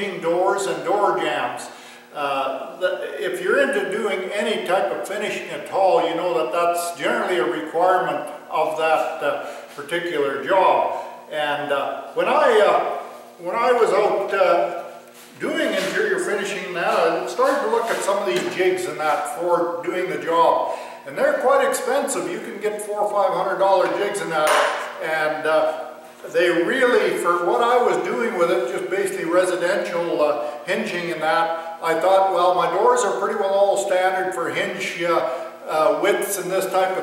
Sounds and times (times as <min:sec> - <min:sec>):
Speech: 0:00.0 - 0:37.0.